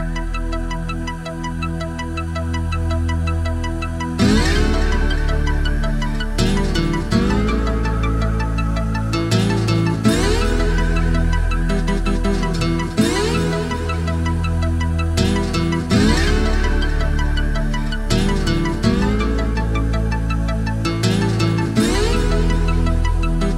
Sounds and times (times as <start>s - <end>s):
Music: 0.0s - 23.5s.